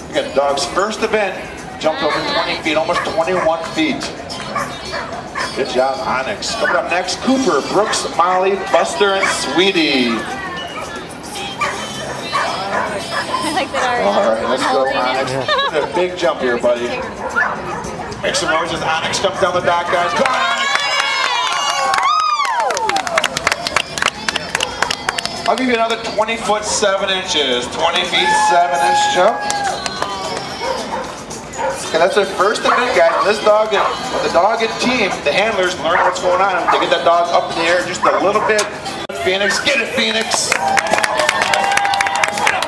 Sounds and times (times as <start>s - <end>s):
Music: 0.0s - 19.6s, 20.6s - 42.6s.